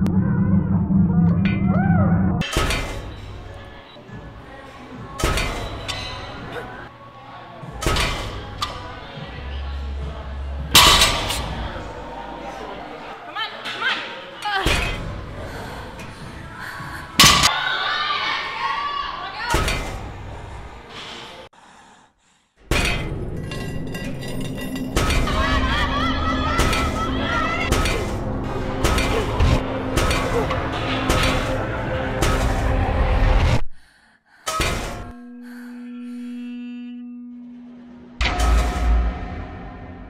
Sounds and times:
Music: 2.5 - 13.0, 22.8 - 33.6.

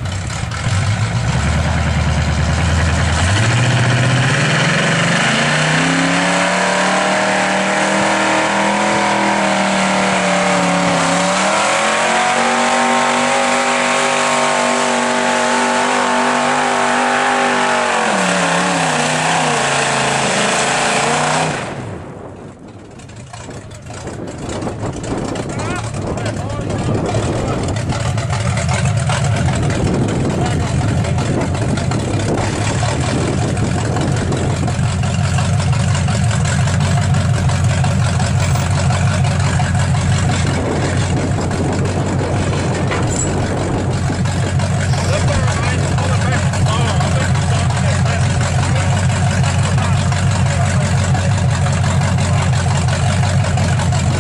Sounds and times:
Truck: 0.0 - 54.2.

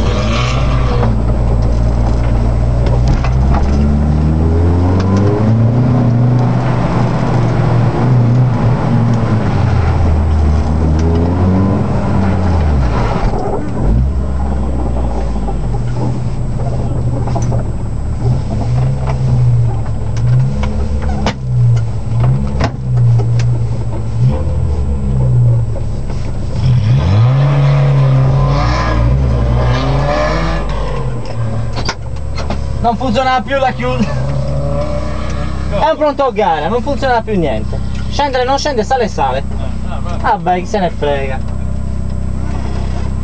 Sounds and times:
Car: 0.0 - 43.2
Speech: 32.8 - 34.2, 35.7 - 41.5.

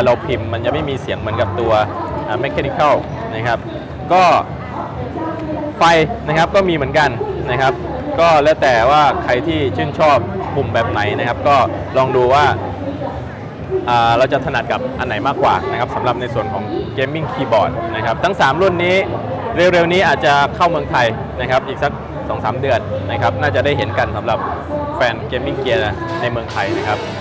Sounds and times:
Inside, public space: 0.0 - 27.2
Speech: 0.0 - 27.2.

